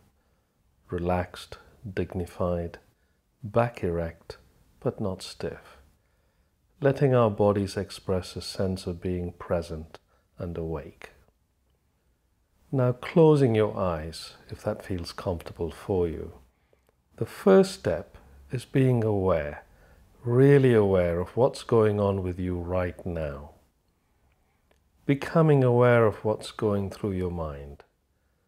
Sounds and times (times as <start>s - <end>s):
Speech: 0.9s - 5.9s, 6.8s - 11.3s, 12.7s - 16.4s, 17.2s - 23.6s, 25.0s - 27.9s.